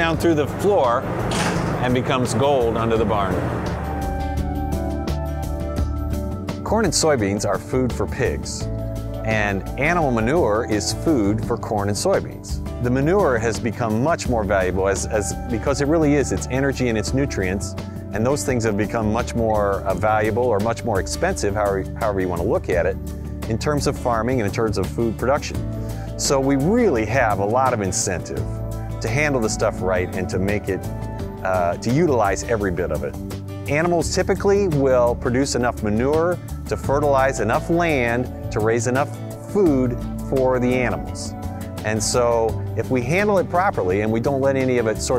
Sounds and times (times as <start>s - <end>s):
Speech: 0.0s - 1.0s, 1.8s - 3.5s, 6.7s - 8.7s, 9.3s - 25.6s, 26.2s - 30.8s, 31.4s - 33.1s, 33.7s - 45.1s
Music: 0.0s - 45.1s.